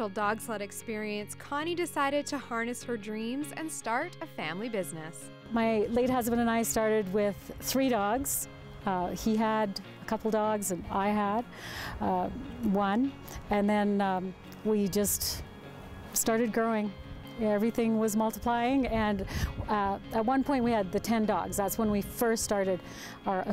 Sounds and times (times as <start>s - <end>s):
Music: 0.0s - 23.5s.